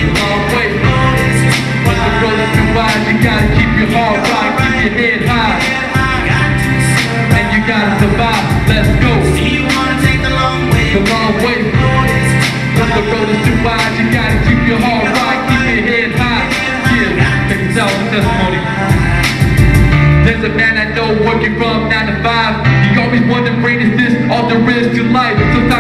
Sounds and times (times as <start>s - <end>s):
Music: 0.0s - 25.8s.